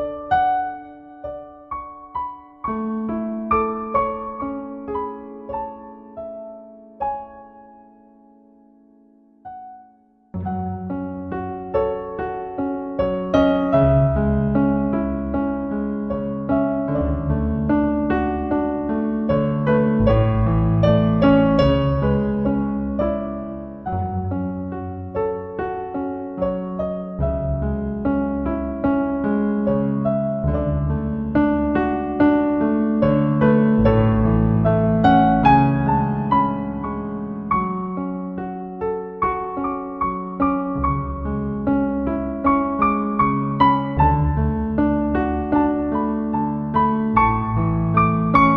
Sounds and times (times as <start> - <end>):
Music: 0.0 - 48.5.